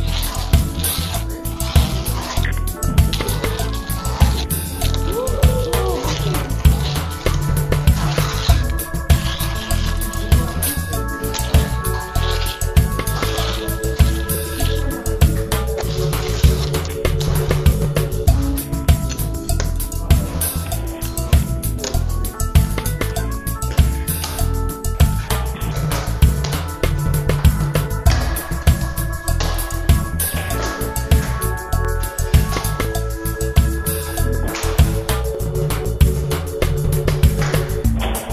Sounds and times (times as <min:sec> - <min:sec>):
Music: 0:00.0 - 0:38.3.